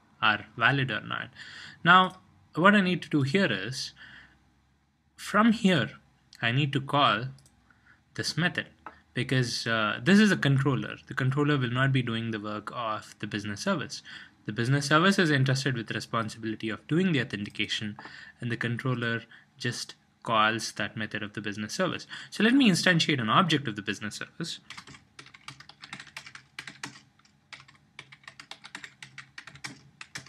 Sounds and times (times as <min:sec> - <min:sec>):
Speech: 0:00.2 - 0:04.0, 0:05.2 - 0:07.4, 0:08.2 - 0:24.7.